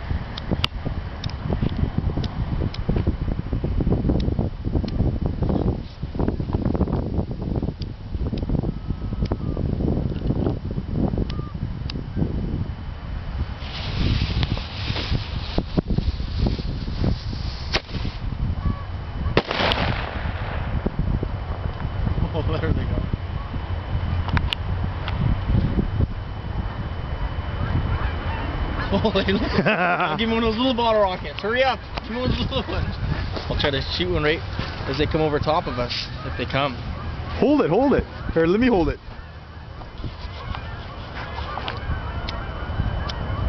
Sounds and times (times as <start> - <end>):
Speech: 30.2 - 32.9, 33.5 - 36.8, 37.4 - 39.0.